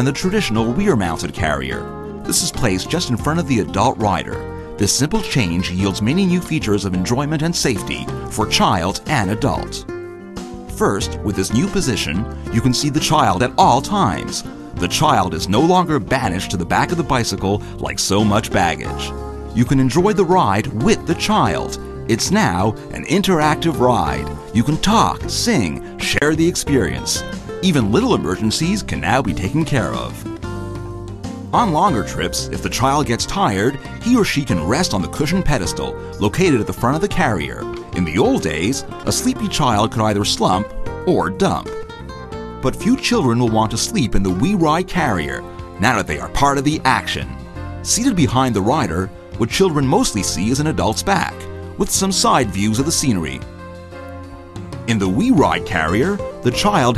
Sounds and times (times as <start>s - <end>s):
Speech: 0.0s - 9.9s, 10.7s - 30.3s, 31.5s - 41.8s, 42.6s - 53.4s, 54.9s - 56.9s
Music: 0.0s - 56.9s.